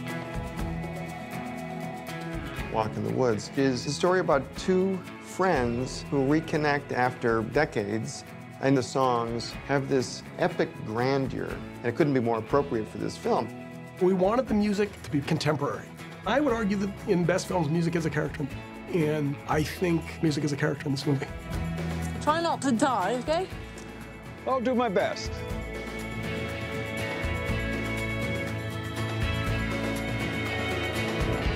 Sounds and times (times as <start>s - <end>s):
Music: 0.0s - 31.5s
Speech: 2.8s - 21.3s, 24.5s - 25.3s.